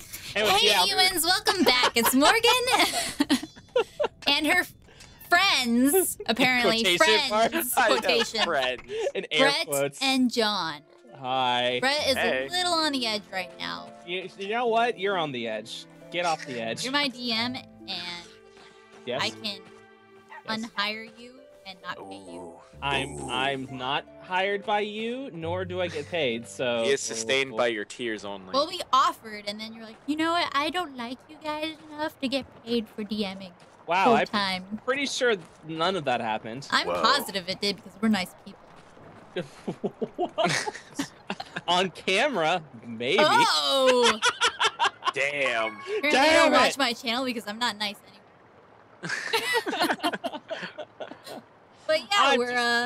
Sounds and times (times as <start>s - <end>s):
Speech: 0.2s - 2.9s, 4.2s - 4.7s, 5.3s - 18.3s, 19.1s - 19.6s, 20.5s - 38.5s, 41.6s - 44.2s, 45.2s - 48.1s, 51.9s - 52.8s.